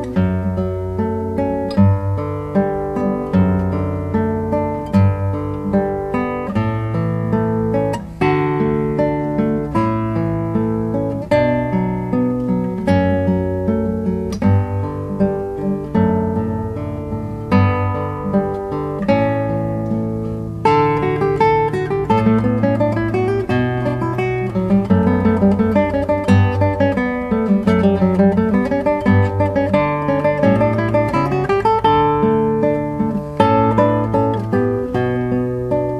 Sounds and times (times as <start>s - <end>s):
Acoustic guitar: 0.0s - 35.9s
Strum: 0.0s - 35.9s.